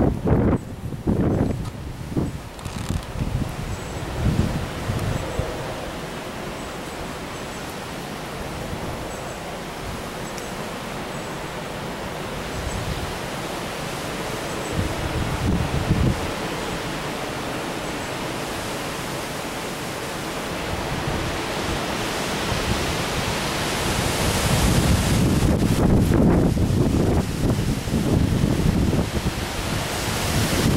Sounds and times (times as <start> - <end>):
Outside, rural or natural: 0.0 - 30.7
Pink noise: 0.0 - 30.7.